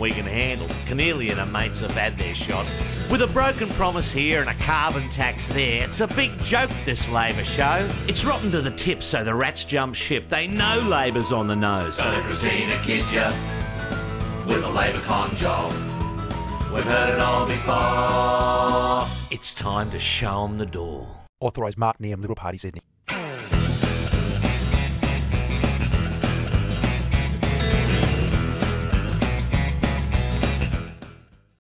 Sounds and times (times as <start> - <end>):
Speech: 0.0 - 12.2, 19.3 - 22.9
Music: 0.0 - 20.2, 23.1 - 31.6.